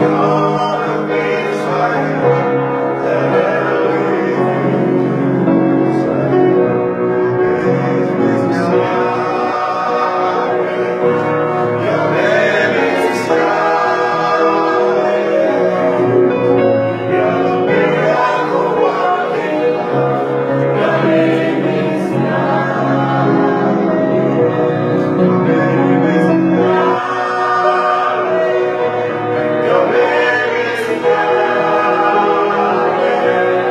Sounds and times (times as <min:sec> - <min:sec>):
Male singing: 0:00.0 - 0:16.2, 0:17.1 - 0:20.1, 0:24.4 - 0:33.7
Piano: 0:00.0 - 0:33.7.